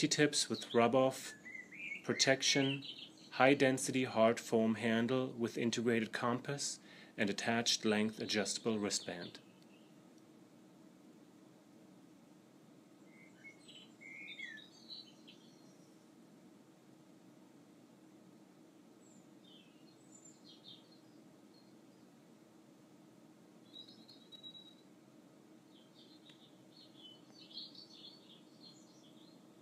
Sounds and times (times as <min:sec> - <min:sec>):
Bird vocalization, bird call, bird song: 0:00.0 - 0:03.7, 0:08.4 - 0:10.0, 0:13.0 - 0:16.1, 0:19.0 - 0:22.2, 0:23.6 - 0:24.9, 0:25.6 - 0:29.6
Outside, rural or natural: 0:00.0 - 0:29.6.